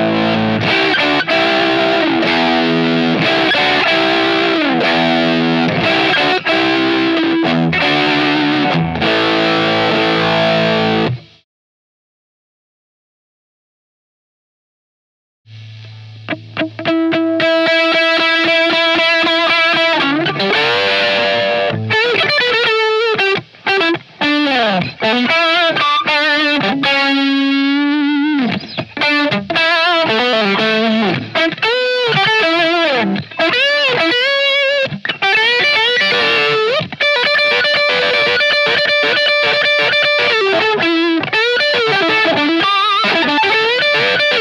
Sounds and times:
Bass guitar: 0.0 - 11.4, 15.5 - 44.4
Electric guitar: 0.0 - 11.4, 15.5 - 44.4
Strum: 15.5 - 44.4.

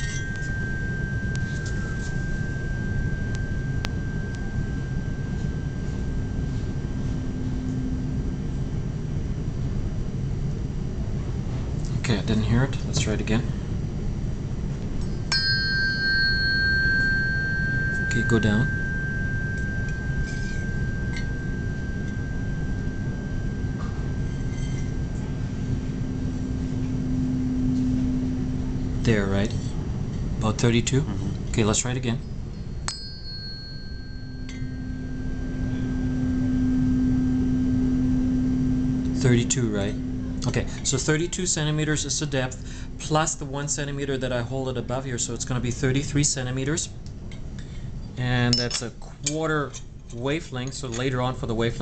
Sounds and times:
Speech: 11.9 - 13.5, 18.1 - 18.7, 29.0 - 29.7, 30.4 - 32.2, 39.2 - 47.0, 48.2 - 51.8.

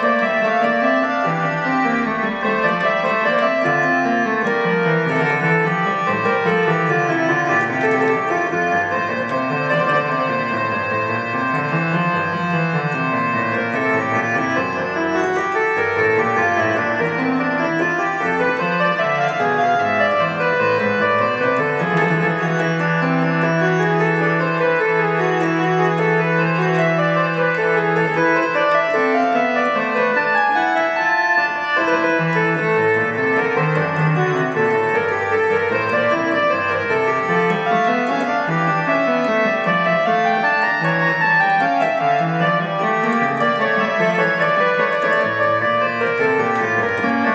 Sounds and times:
Electric piano: 0.0 - 47.3.

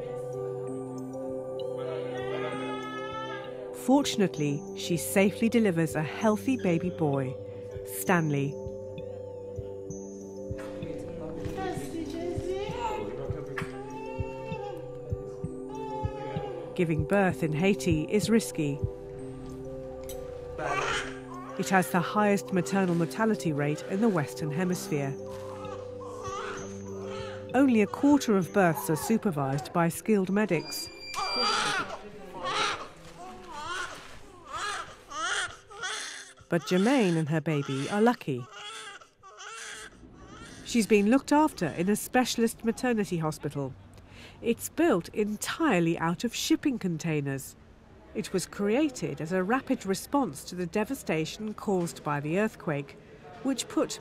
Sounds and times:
Music: 0.0 - 38.4.

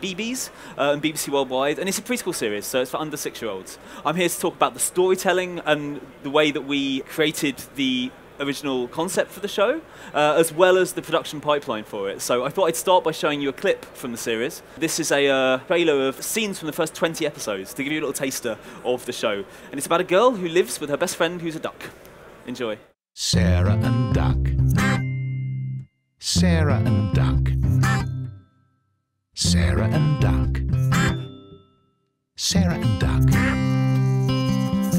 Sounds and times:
Speech: 0.0 - 23.6, 26.2 - 27.4, 29.4 - 30.6, 32.4 - 33.3.

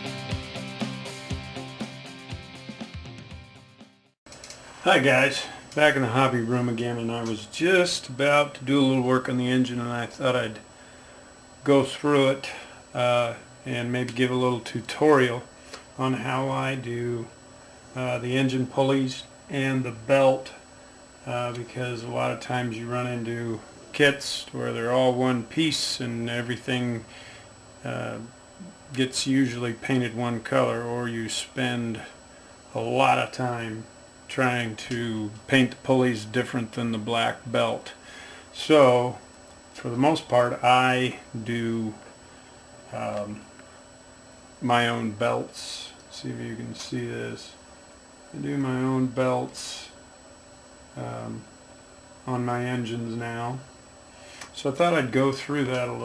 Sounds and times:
Speech: 4.8 - 10.7, 11.6 - 17.4, 18.0 - 20.6, 21.2 - 27.1, 27.8 - 38.0, 38.6 - 39.2, 39.8 - 42.1, 42.9 - 43.5, 44.6 - 47.6, 48.3 - 50.0, 51.0 - 51.5, 52.3 - 53.7, 54.5 - 56.0.

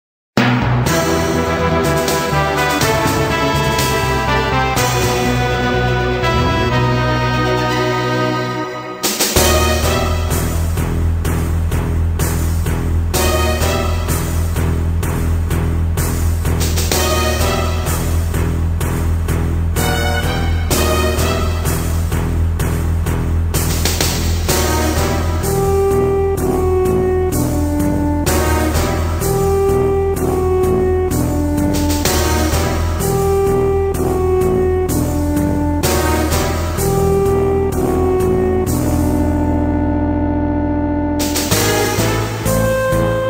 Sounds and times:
Video game music: 0.4 - 43.2.

